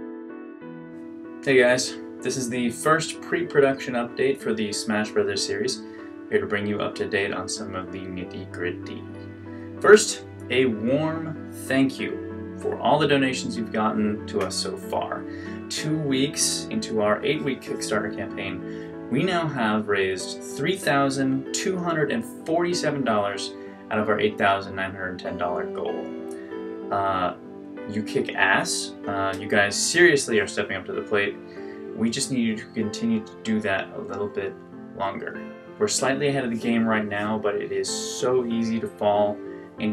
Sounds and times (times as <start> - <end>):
Music: 0.0 - 39.9
Speech: 1.4 - 9.2, 9.8 - 26.2, 26.9 - 31.4, 32.0 - 39.9.